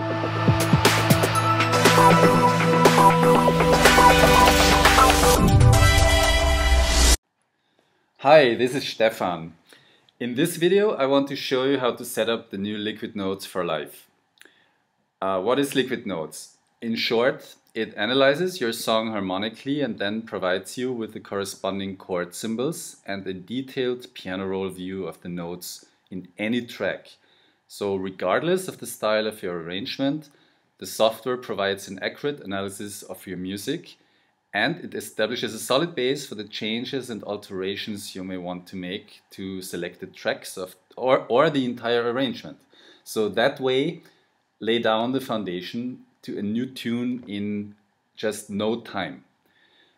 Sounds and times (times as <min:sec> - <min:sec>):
Speech: 0:08.2 - 0:09.6, 0:10.2 - 0:14.1, 0:15.2 - 0:34.0, 0:34.6 - 0:44.0, 0:44.6 - 0:49.3.